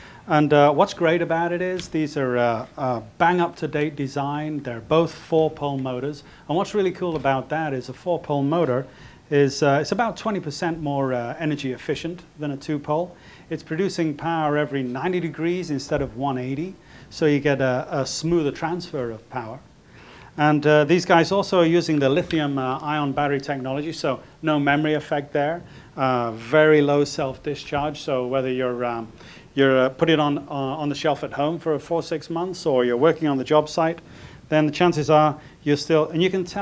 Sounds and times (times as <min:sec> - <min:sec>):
Speech: 0:00.3 - 0:19.7, 0:20.4 - 0:36.6.